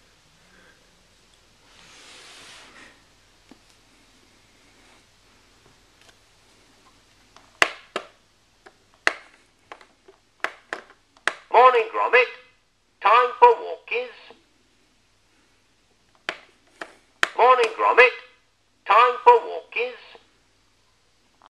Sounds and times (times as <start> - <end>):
Speech: 11.5 - 14.4, 17.4 - 20.2.